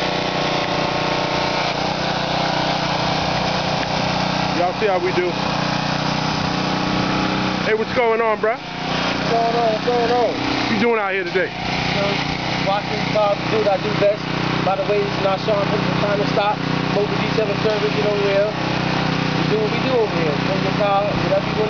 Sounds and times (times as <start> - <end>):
Vehicle: 0.0 - 21.7
Speech: 4.6 - 5.4, 7.7 - 8.6, 9.2 - 18.6, 19.4 - 21.7.